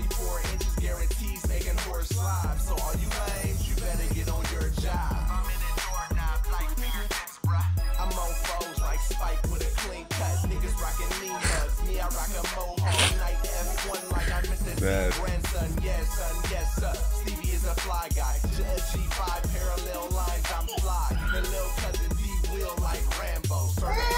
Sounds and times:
Music: 0.0s - 24.1s.

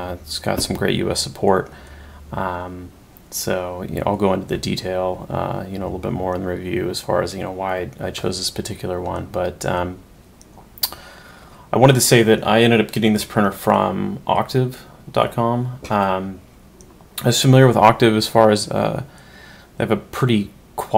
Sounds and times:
Speech: 0.0s - 1.7s, 2.3s - 10.0s, 11.7s - 16.4s, 17.2s - 19.1s, 19.8s - 20.9s.

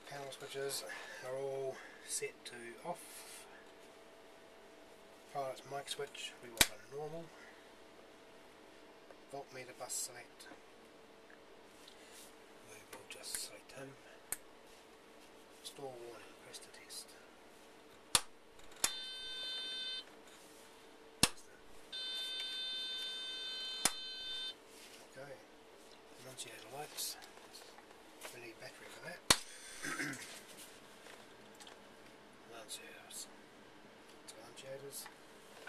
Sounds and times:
Speech: 0.0s - 3.2s, 5.3s - 7.4s, 9.3s - 10.6s, 12.7s - 14.1s, 15.6s - 17.3s, 25.0s - 25.5s, 26.2s - 27.7s, 28.3s - 29.2s, 32.5s - 33.4s, 34.2s - 35.6s.

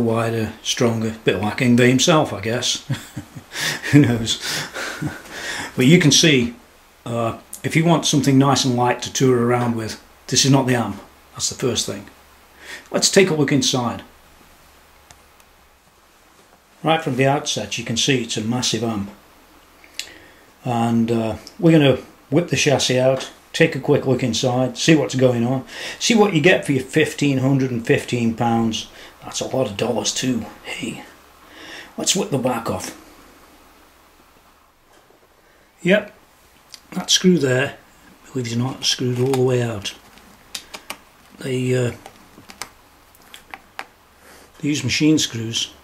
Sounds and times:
Speech: 0.0s - 3.0s, 3.9s - 4.4s, 5.8s - 12.2s, 12.9s - 14.1s, 16.8s - 19.2s, 20.6s - 31.2s, 32.0s - 33.0s, 35.8s - 36.2s, 36.9s - 40.0s, 41.4s - 42.1s, 44.6s - 45.8s.

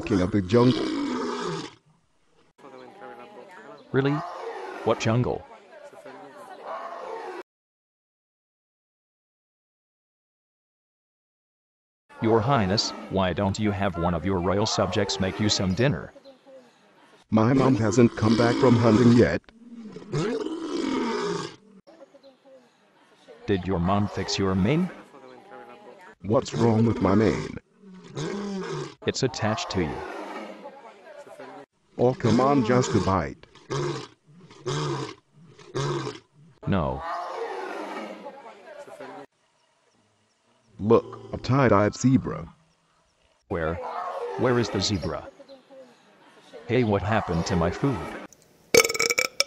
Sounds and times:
Speech: 0.0s - 0.9s, 2.6s - 7.4s, 12.2s - 19.4s, 23.2s - 27.6s, 29.0s - 33.4s, 36.6s - 37.2s, 43.5s - 48.2s
Roar: 0.0s - 1.8s, 4.0s - 5.6s, 6.6s - 7.4s, 12.6s - 13.2s, 17.5s - 21.8s, 26.4s - 30.8s, 32.0s - 38.5s, 40.8s - 41.6s, 43.8s - 45.2s, 47.2s - 48.3s.

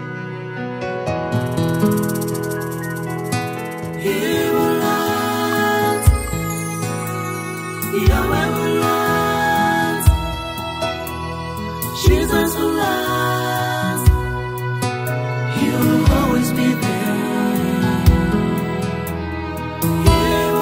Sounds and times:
Gospel music: 0.0s - 20.6s.

